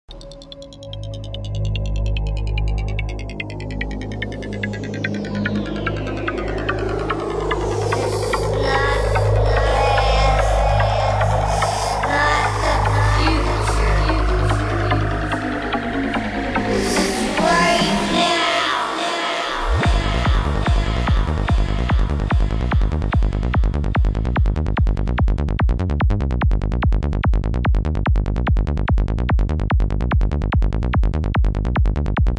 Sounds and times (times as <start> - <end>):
Trance music: 0.1 - 32.3.